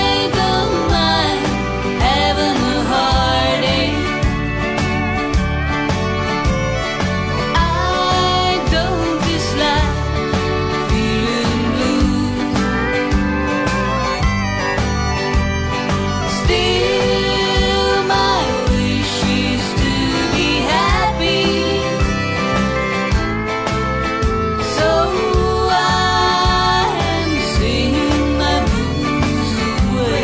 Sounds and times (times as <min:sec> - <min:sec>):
Female singing: 0:00.0 - 0:04.3, 0:07.5 - 0:12.8, 0:16.3 - 0:22.1, 0:24.7 - 0:30.2
Music: 0:00.0 - 0:30.2.